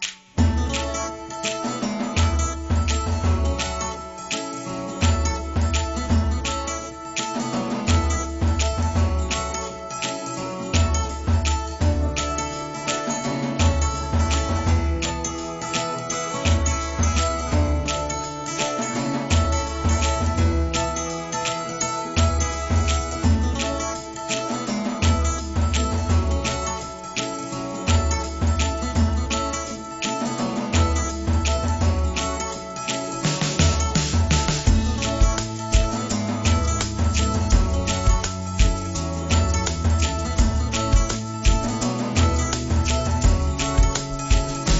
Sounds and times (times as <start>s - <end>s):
Music: 0.0s - 44.7s.